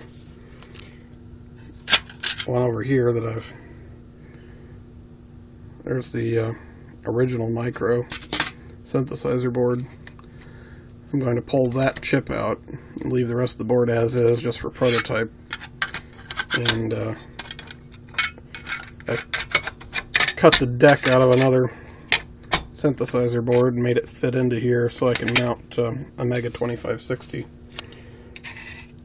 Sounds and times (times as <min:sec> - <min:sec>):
Speech: 0:02.4 - 0:03.6, 0:05.8 - 0:08.1, 0:08.9 - 0:09.9, 0:11.1 - 0:15.3, 0:16.6 - 0:17.2, 0:20.4 - 0:21.8, 0:22.8 - 0:27.5.